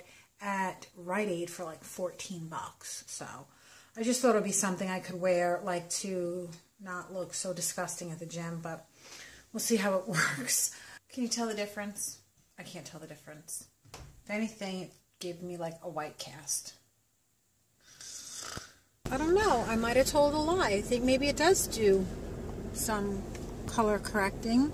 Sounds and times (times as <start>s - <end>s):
Speech: 0.4s - 8.8s, 9.6s - 13.7s, 14.3s - 16.8s, 19.1s - 22.1s, 22.8s - 24.7s.